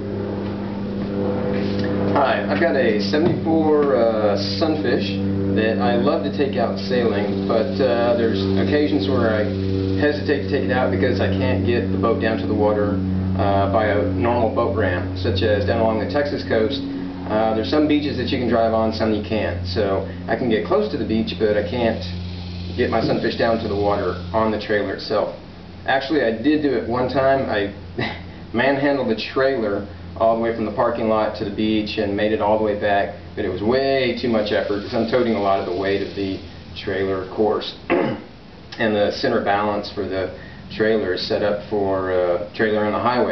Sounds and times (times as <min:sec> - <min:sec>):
Speech: 0:02.2 - 0:22.2, 0:22.8 - 0:38.2, 0:38.8 - 0:43.3.